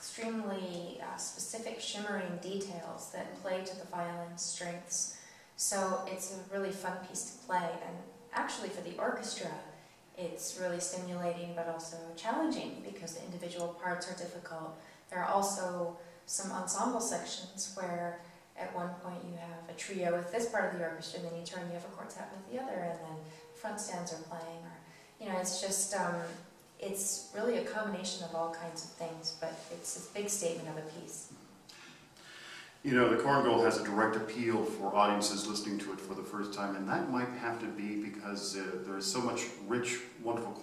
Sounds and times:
Speech: 0:00.0 - 0:31.3, 0:32.8 - 0:40.6.

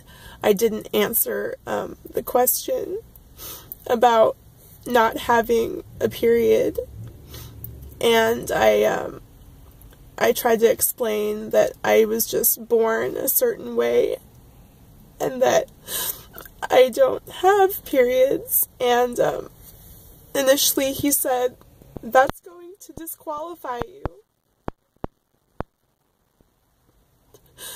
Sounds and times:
Speech: 0:00.4 - 0:03.0, 0:03.9 - 0:06.8, 0:08.0 - 0:09.2, 0:10.2 - 0:14.2, 0:15.2 - 0:15.7, 0:16.6 - 0:19.5, 0:20.4 - 0:24.2.

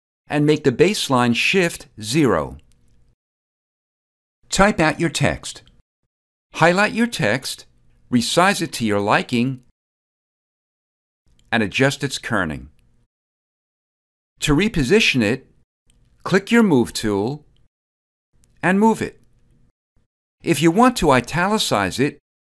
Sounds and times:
Speech: 0:00.3 - 0:02.6, 0:04.5 - 0:05.7, 0:06.6 - 0:09.7, 0:11.6 - 0:12.8, 0:14.4 - 0:15.5, 0:16.3 - 0:17.5, 0:18.6 - 0:19.2, 0:20.5 - 0:22.2
Inside, small room: 0:00.3 - 0:03.2, 0:06.6 - 0:09.8, 0:11.3 - 0:13.1, 0:18.4 - 0:22.2.

